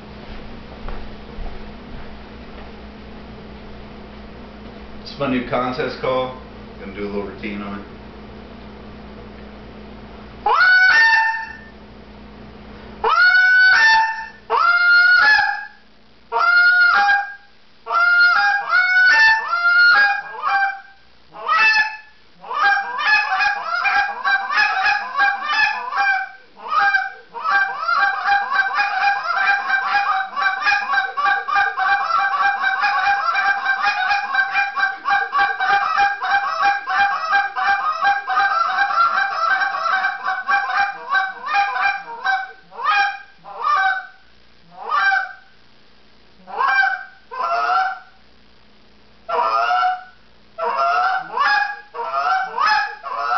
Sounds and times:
Honk: 0:10.5 - 0:11.7, 0:13.0 - 0:15.8, 0:16.4 - 0:45.5, 0:46.5 - 0:48.2, 0:49.3 - 0:53.3.

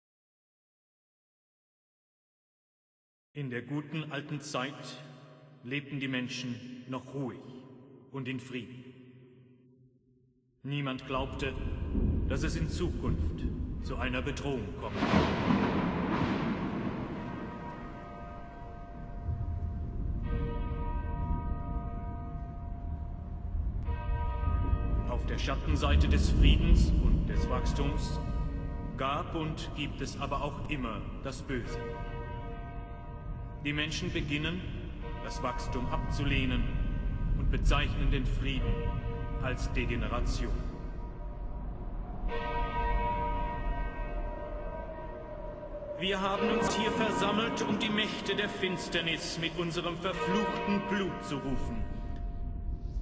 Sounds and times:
Speech: 0:03.4 - 0:08.8, 0:10.6 - 0:15.2, 0:25.1 - 0:28.2, 0:29.0 - 0:31.8, 0:33.7 - 0:36.8, 0:37.4 - 0:38.8, 0:39.4 - 0:40.7, 0:46.0 - 0:52.0.

